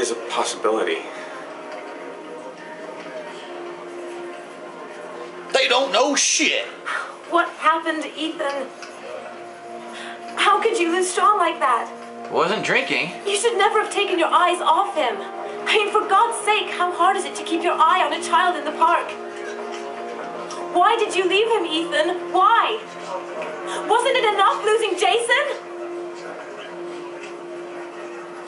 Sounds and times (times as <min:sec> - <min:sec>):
Music: 0:00.0 - 0:28.4.